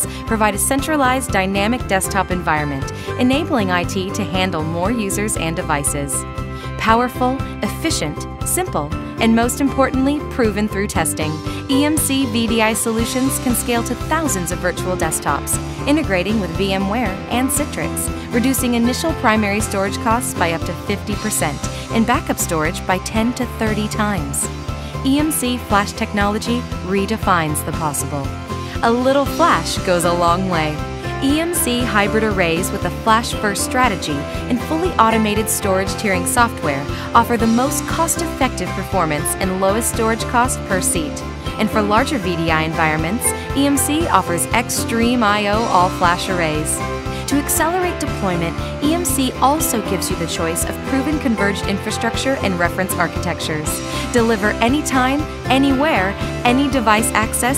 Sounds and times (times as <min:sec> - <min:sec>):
Music: 0:00.0 - 0:57.5
Speech: 0:00.0 - 0:57.5.